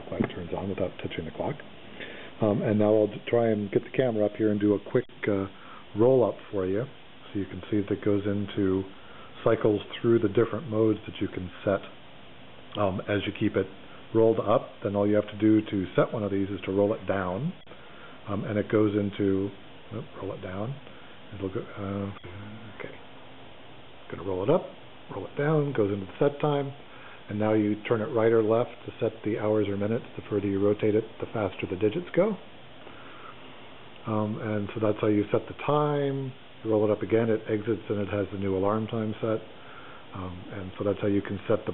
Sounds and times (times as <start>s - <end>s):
Speech: 0.0s - 1.7s, 2.4s - 12.0s, 12.8s - 17.6s, 18.2s - 23.0s, 24.1s - 32.5s, 34.0s - 39.5s, 40.1s - 41.7s.